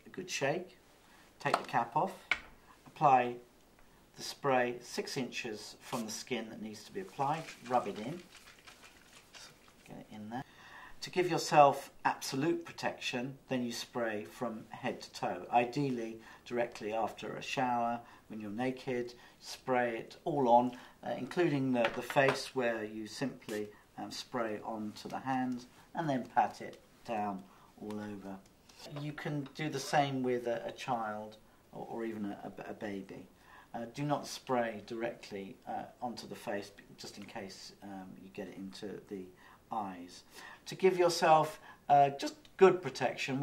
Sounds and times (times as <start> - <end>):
Speech: 0.0 - 0.8, 1.4 - 2.3, 2.9 - 3.5, 4.2 - 8.3, 9.9 - 43.4.